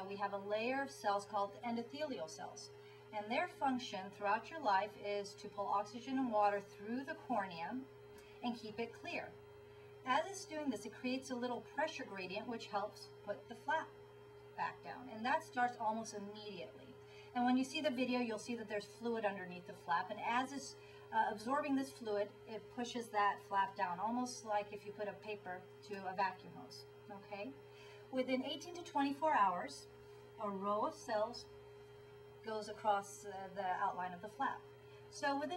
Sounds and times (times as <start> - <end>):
Speech: 0.0 - 9.4, 10.1 - 14.0, 14.6 - 31.5, 32.4 - 35.5.